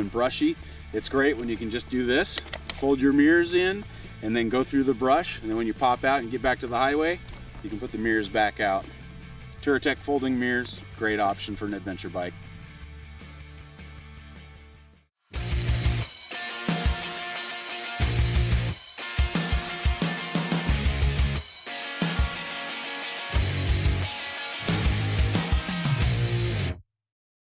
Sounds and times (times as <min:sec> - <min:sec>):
Music: 0:00.0 - 0:26.8.